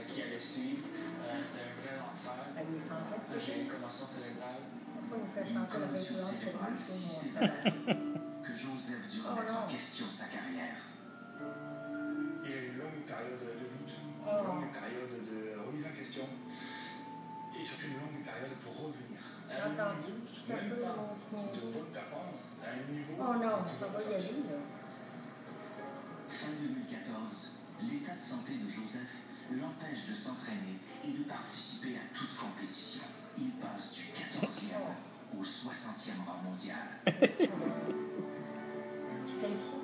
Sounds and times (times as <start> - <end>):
Music: 0.0 - 39.8.